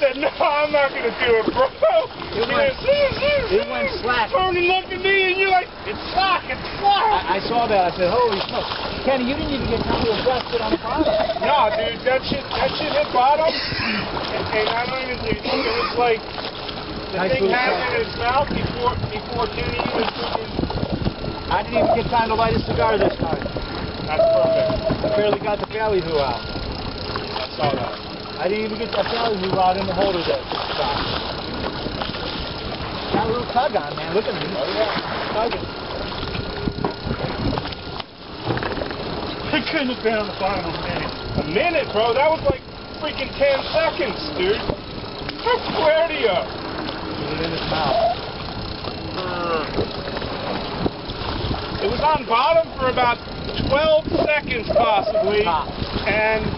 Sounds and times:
Boat, Water vehicle: 0:00.0 - 0:56.5
Speech: 0:21.5 - 0:23.4.

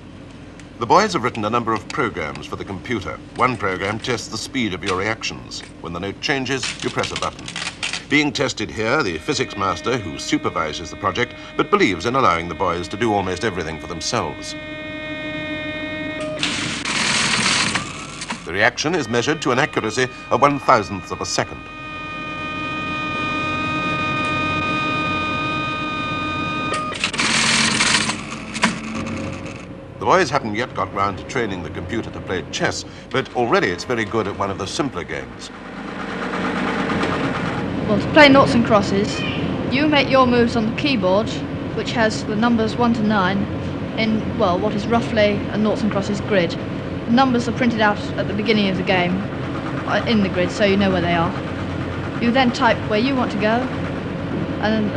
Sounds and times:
Speech: 0:00.8 - 0:07.4, 0:08.1 - 0:14.6, 0:18.5 - 0:21.6, 0:30.0 - 0:35.5, 0:37.9 - 0:49.2, 0:49.9 - 0:51.4, 0:52.2 - 0:53.7, 0:54.6 - 0:54.9.

